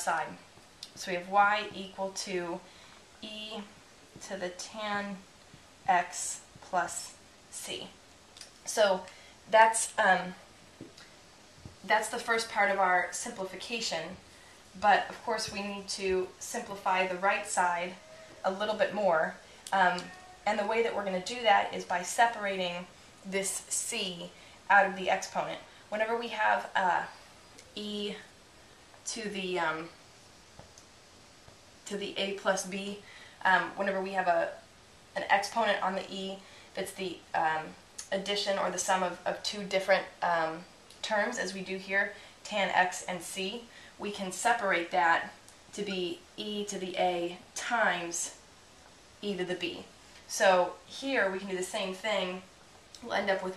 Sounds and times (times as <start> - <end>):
Speech: 0.0 - 5.2, 5.9 - 8.0, 8.7 - 10.4, 11.8 - 14.2, 14.8 - 28.3, 29.0 - 30.0, 31.9 - 34.6, 35.2 - 48.4, 49.2 - 53.5.